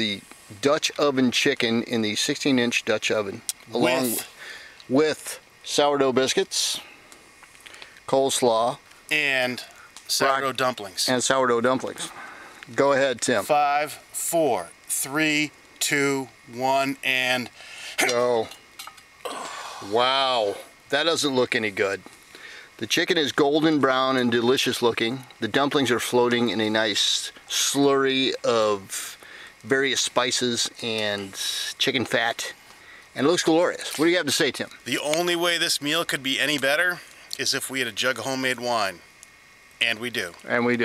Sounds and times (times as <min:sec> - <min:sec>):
Speech: 0:00.0 - 0:04.3, 0:04.9 - 0:06.9, 0:08.1 - 0:18.5, 0:19.8 - 0:22.0, 0:22.8 - 0:32.6, 0:33.2 - 0:39.0, 0:39.8 - 0:40.8.